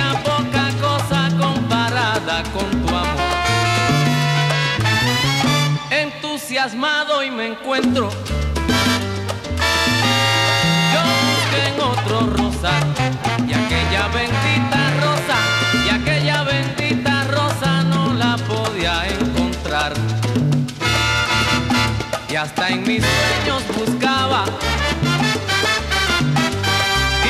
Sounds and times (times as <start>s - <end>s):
Salsa music: 0.0s - 27.2s.